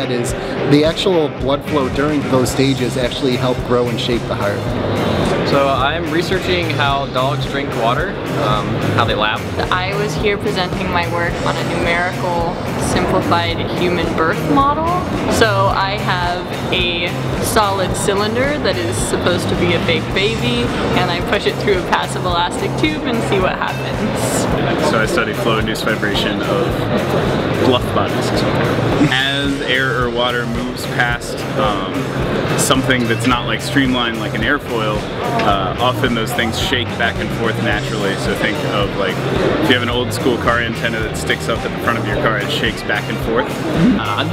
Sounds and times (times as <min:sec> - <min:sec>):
Speech: 0:00.0 - 0:04.7, 0:05.3 - 0:26.9, 0:27.6 - 0:44.3
Music: 0:00.0 - 0:44.3.